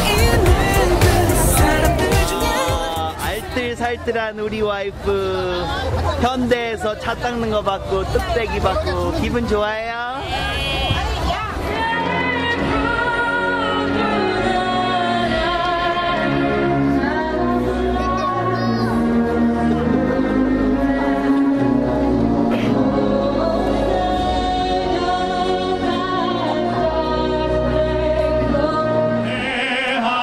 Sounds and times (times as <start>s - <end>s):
Music: 0.0s - 3.5s, 11.5s - 30.2s.